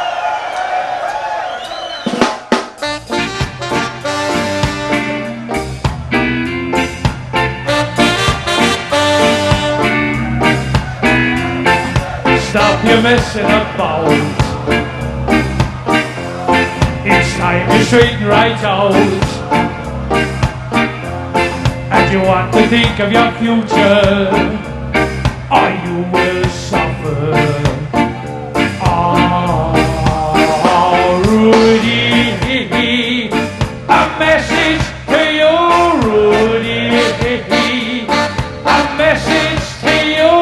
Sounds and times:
Ska: 1.1s - 40.4s.

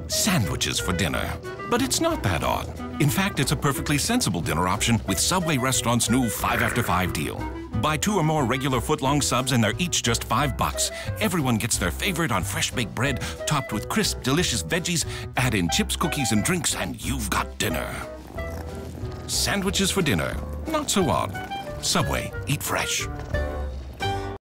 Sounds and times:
Music: 0.0s - 24.4s
Speech: 0.1s - 18.1s, 19.3s - 23.1s.

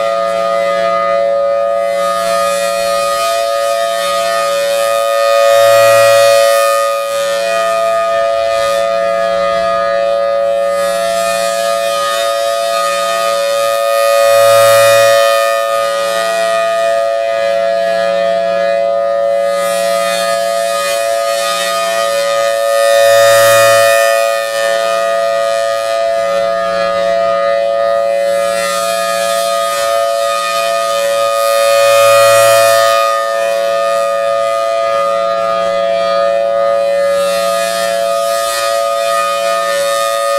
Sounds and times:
Civil defense siren: 0.0s - 40.3s.

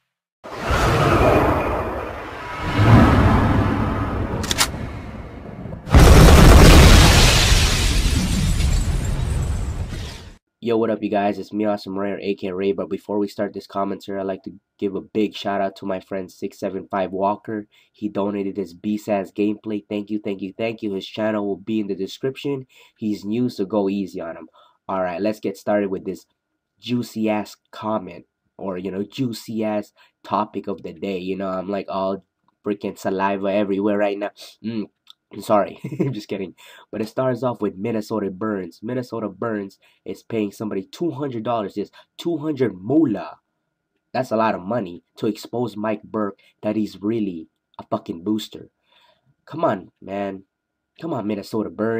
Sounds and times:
Speech: 10.6s - 26.2s, 26.8s - 43.4s, 44.2s - 48.7s, 49.5s - 51.9s.

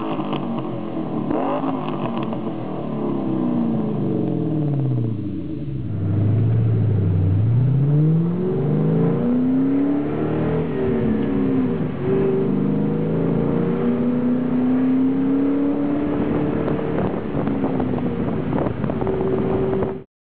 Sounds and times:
Accelerating, revving, vroom: 0.0s - 2.5s, 6.0s - 17.4s
Car: 0.0s - 20.1s
Medium engine (mid frequency): 0.0s - 20.1s.

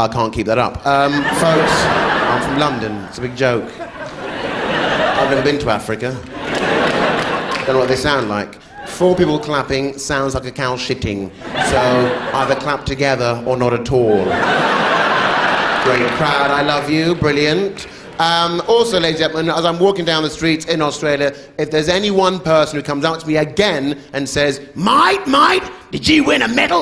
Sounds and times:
Speech: 0.0s - 3.8s, 5.2s - 6.3s, 7.6s - 14.4s, 15.8s - 26.8s.

